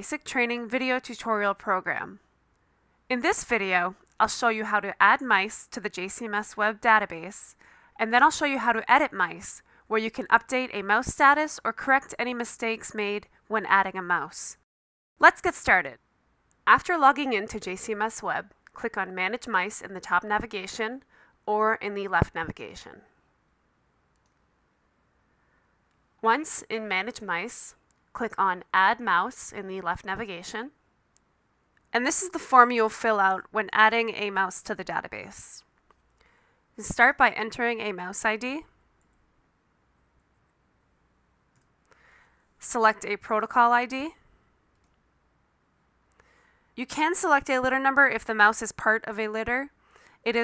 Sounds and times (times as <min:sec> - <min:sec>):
Speech: 0:00.0 - 0:02.2, 0:03.1 - 0:14.6, 0:15.2 - 0:16.0, 0:16.7 - 0:23.0, 0:26.2 - 0:30.8, 0:32.0 - 0:35.7, 0:36.8 - 0:38.7, 0:42.6 - 0:44.2, 0:46.8 - 0:49.7.